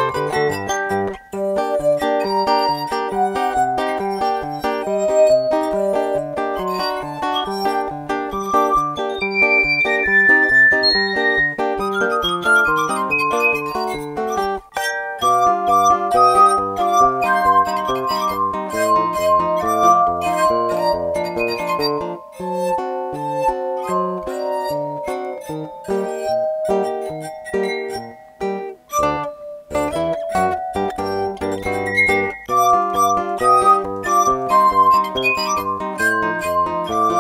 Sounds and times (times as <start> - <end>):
Musical instrument: 0.0 - 37.2.